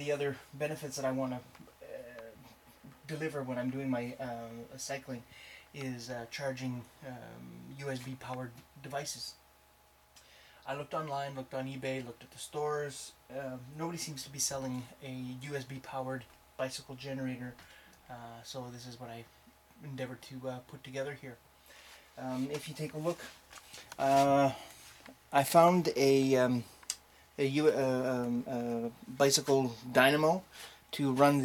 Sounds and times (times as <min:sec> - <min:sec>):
Speech: 0:00.0 - 0:09.4, 0:10.6 - 0:21.4, 0:22.2 - 0:23.4, 0:24.0 - 0:24.6, 0:25.3 - 0:26.7, 0:27.4 - 0:31.4.